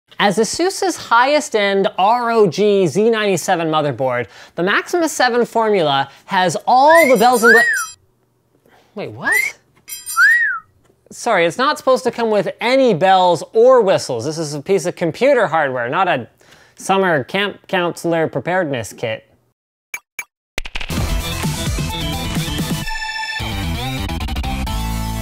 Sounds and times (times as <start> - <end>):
Speech: 0.2 - 7.8, 8.9 - 9.6, 11.1 - 19.4.